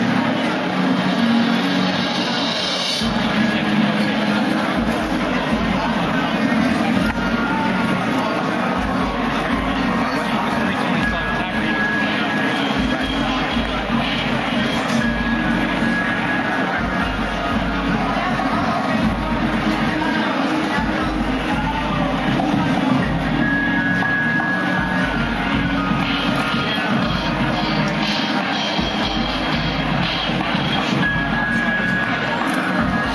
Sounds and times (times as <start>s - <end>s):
Music: 0.0s - 33.1s
Speech: 0.0s - 33.1s.